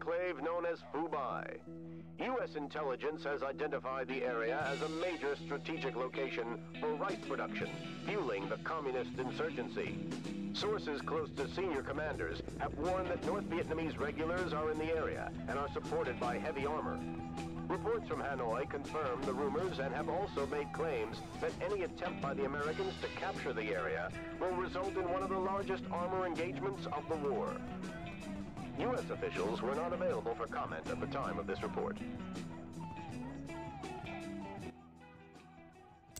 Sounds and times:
Male speech, man speaking: 0.0s - 1.6s, 2.2s - 10.0s, 10.6s - 17.0s, 17.7s - 27.7s, 28.7s - 32.0s
Music: 0.0s - 36.1s.

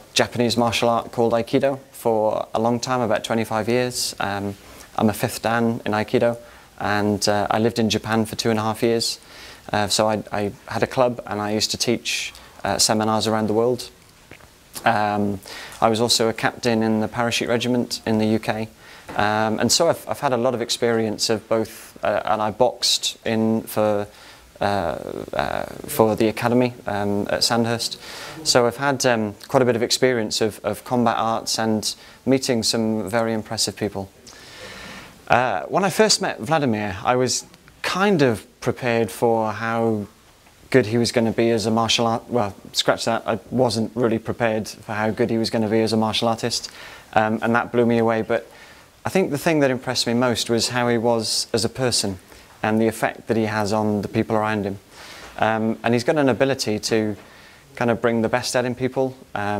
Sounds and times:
Speech: 0.1s - 14.0s, 14.8s - 34.2s, 35.3s - 54.8s, 55.4s - 57.2s, 57.8s - 59.5s.

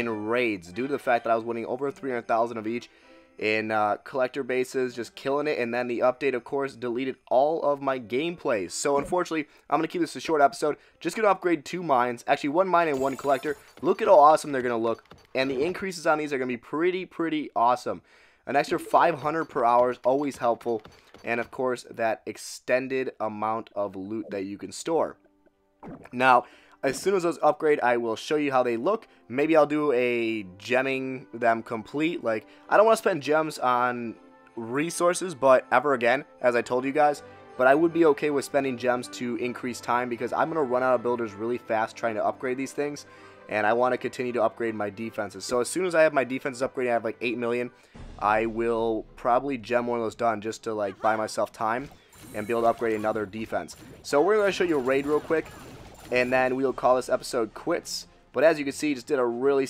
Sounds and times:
Speech: 0.0s - 25.2s, 26.1s - 55.5s, 56.1s - 59.6s.

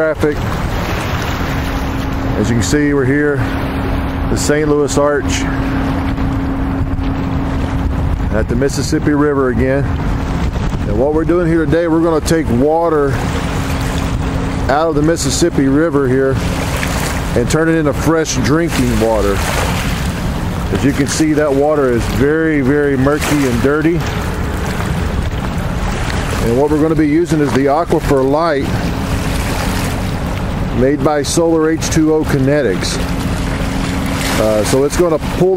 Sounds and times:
Speech: 0.0s - 0.4s, 2.4s - 3.5s, 4.3s - 5.6s, 8.3s - 9.9s, 10.9s - 13.2s, 14.7s - 16.4s, 17.4s - 19.4s, 20.7s - 24.1s, 26.4s - 28.8s, 30.8s - 33.0s, 34.4s - 35.5s.

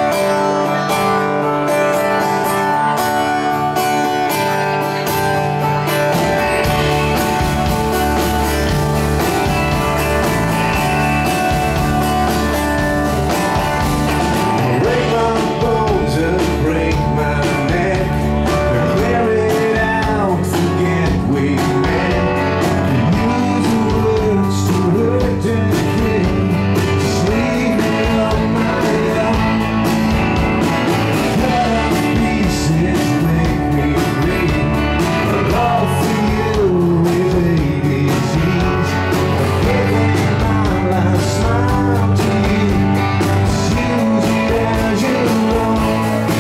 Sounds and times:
Rhythm and blues: 0.0s - 46.4s.

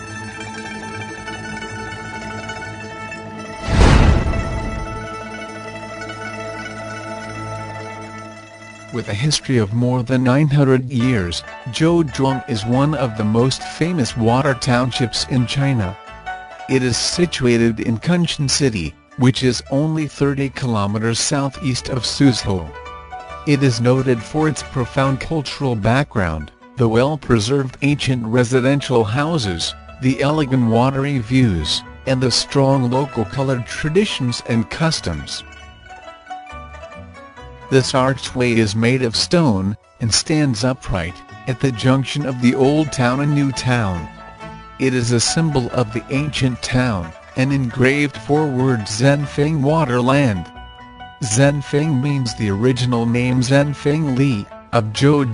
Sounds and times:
Speech: 8.9s - 16.0s, 16.7s - 22.8s, 23.5s - 35.5s, 37.7s - 44.1s, 44.8s - 50.5s, 51.2s - 55.3s.

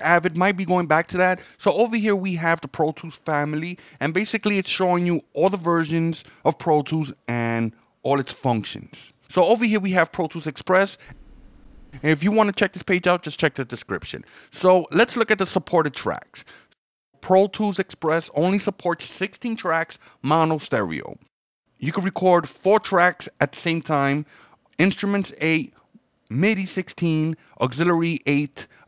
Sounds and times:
Speech: 0.0s - 11.0s, 12.0s - 16.5s, 17.2s - 28.7s.

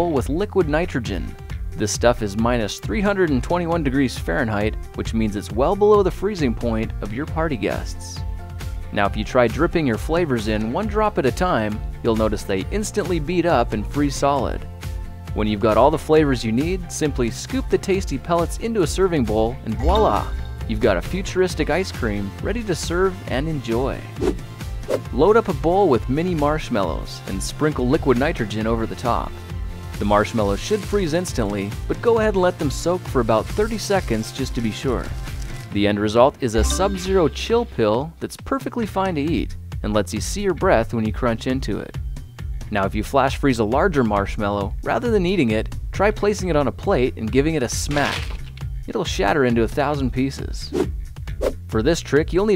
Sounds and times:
Speech: 0.0s - 8.2s, 8.9s - 14.6s, 15.4s - 24.1s, 25.1s - 29.4s, 30.0s - 35.1s, 35.8s - 42.0s, 42.7s - 48.2s, 48.9s - 50.7s, 51.7s - 52.5s
Music: 0.0s - 52.5s.

